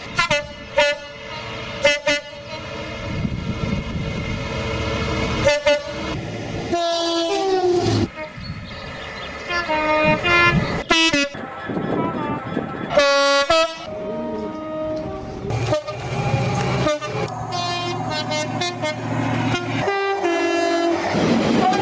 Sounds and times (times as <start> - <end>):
Subway, metro, underground: 0.0 - 21.8.